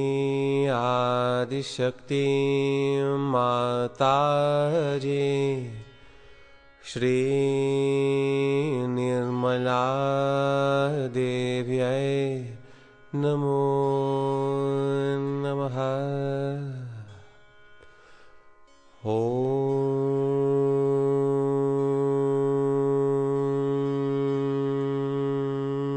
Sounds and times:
Mantra: 0.0 - 5.8, 6.9 - 17.0, 19.1 - 25.9.

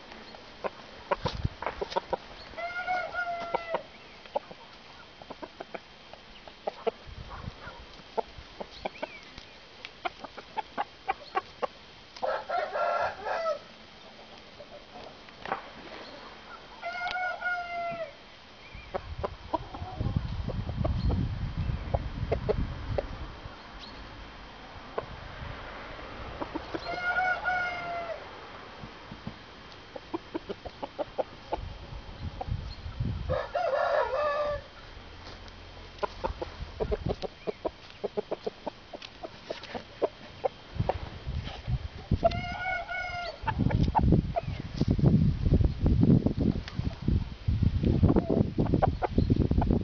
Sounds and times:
Cluck: 0.6 - 2.2, 3.3 - 9.2, 10.0 - 11.7, 21.9 - 23.1, 29.9 - 31.6, 36.0 - 41.0
Crowing, cock-a-doodle-doo: 2.6 - 3.8, 12.2 - 13.7, 16.8 - 18.2, 26.9 - 28.2, 33.3 - 34.7, 42.3 - 43.4.

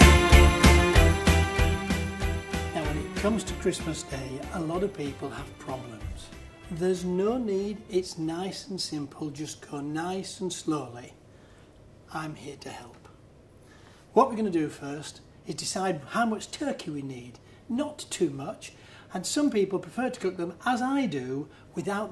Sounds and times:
Music: 0.0 - 8.5
Speech: 2.8 - 11.2, 12.1 - 13.2, 14.1 - 22.1.

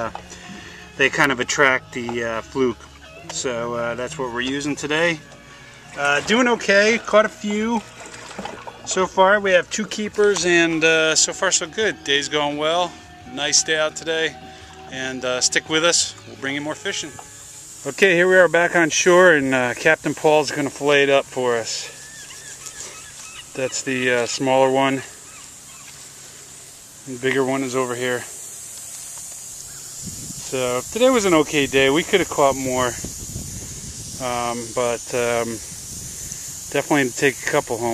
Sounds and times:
Speech: 1.0 - 5.2, 6.0 - 7.8, 8.9 - 14.3, 14.9 - 17.2, 17.9 - 21.9, 23.6 - 25.1, 27.1 - 28.3, 30.5 - 33.0, 34.2 - 35.6, 36.7 - 37.9
Animal: 21.8 - 24.2.

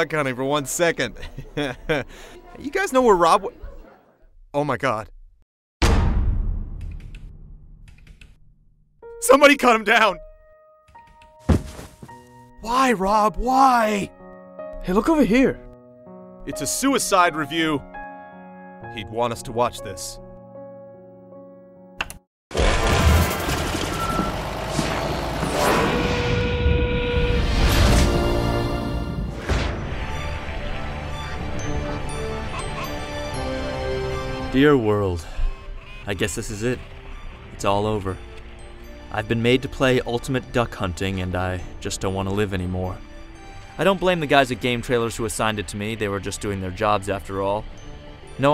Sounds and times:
Music: 9.0 - 22.2, 26.5 - 48.5.

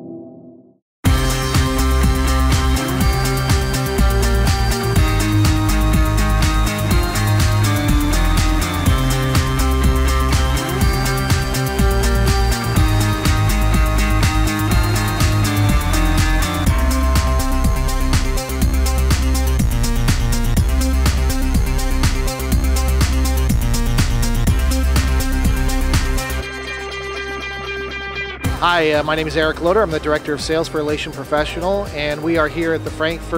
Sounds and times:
Music: 1.1 - 33.3
Speech: 28.6 - 33.3.

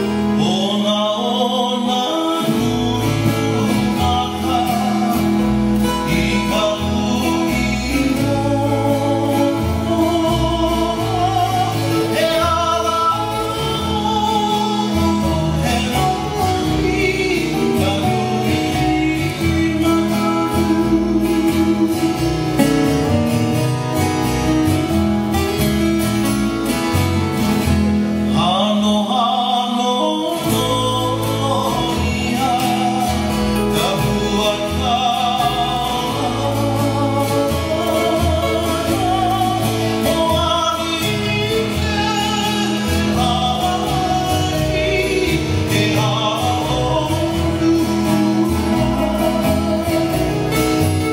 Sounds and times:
Music of Latin America: 0.0 - 51.1.

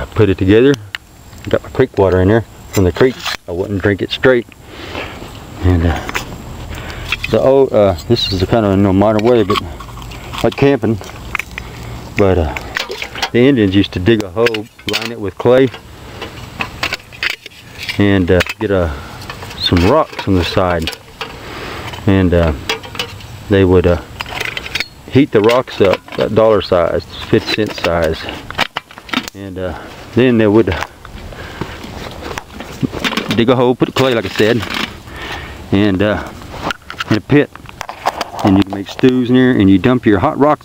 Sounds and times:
Speech: 0.0 - 4.5, 5.6 - 6.2, 7.3 - 9.8, 10.4 - 11.1, 12.2 - 12.7, 13.3 - 15.8, 18.0 - 19.0, 19.6 - 21.0, 22.0 - 22.6, 23.5 - 24.1, 25.1 - 28.4, 29.3 - 30.9, 33.2 - 34.8, 35.7 - 36.4, 37.0 - 37.5, 38.4 - 40.6.

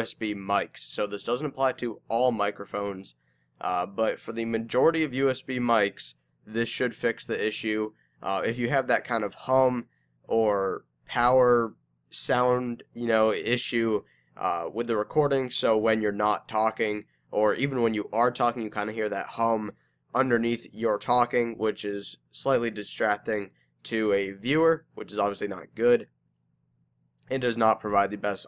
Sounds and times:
Speech: 0.0 - 26.1, 27.2 - 28.4.

